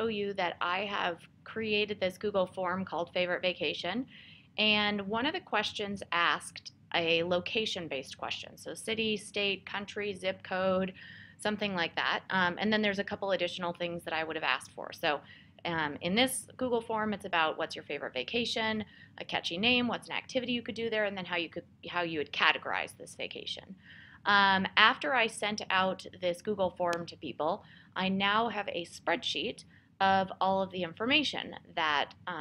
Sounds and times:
Speech: 0:00.0 - 0:32.4.

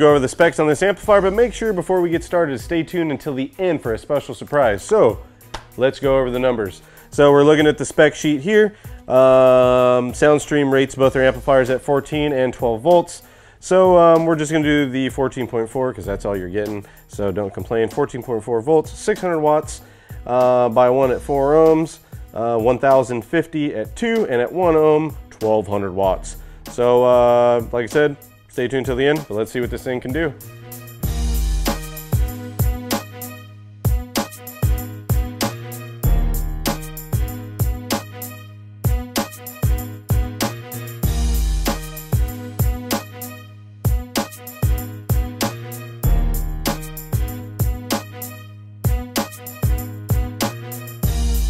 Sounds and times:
Speech: 0:00.0 - 0:05.2, 0:05.8 - 0:30.4
Music: 0:00.0 - 0:51.5.

